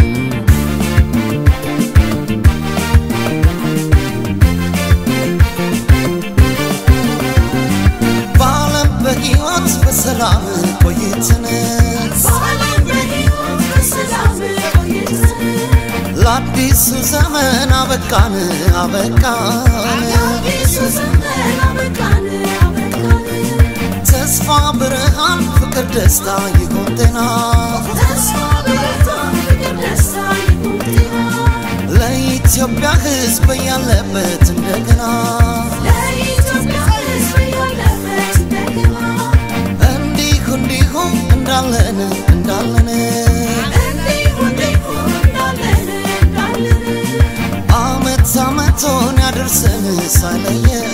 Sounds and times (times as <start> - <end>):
Music: 0.0 - 50.9.